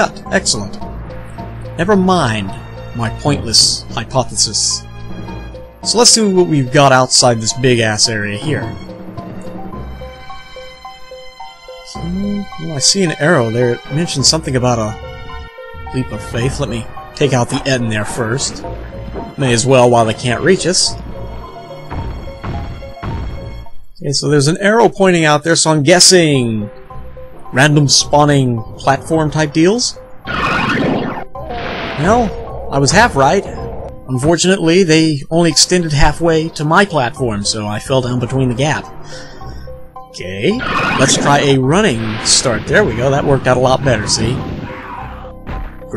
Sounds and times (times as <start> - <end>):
Speech: 0.0 - 0.8, 1.8 - 4.8, 5.9 - 8.8, 11.9 - 15.0, 15.9 - 18.7, 19.4 - 21.0, 24.0 - 26.7, 27.6 - 30.0, 32.0 - 38.9, 40.2 - 44.5
Music: 0.0 - 45.9.